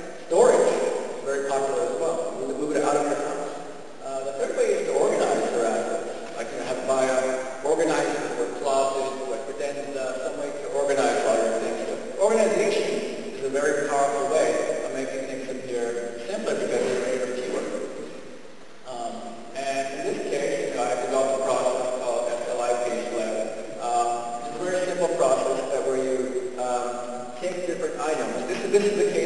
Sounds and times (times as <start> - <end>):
Speech: 0.0 - 18.0, 18.8 - 29.2.